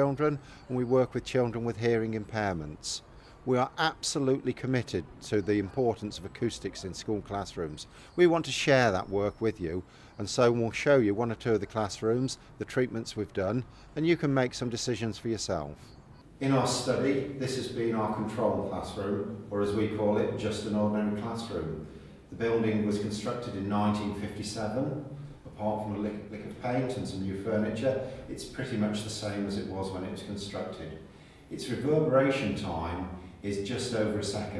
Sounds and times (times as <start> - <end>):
Speech: 0.0 - 34.5.